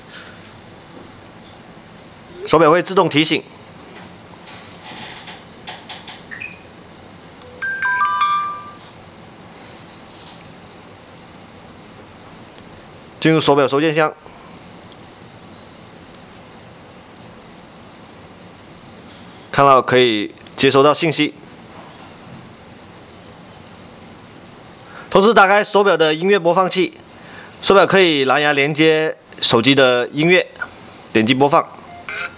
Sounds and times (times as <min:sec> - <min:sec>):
Speech: 0:02.4 - 0:03.5, 0:13.2 - 0:14.2, 0:19.6 - 0:21.4, 0:25.1 - 0:27.0, 0:27.6 - 0:30.6, 0:31.2 - 0:31.8.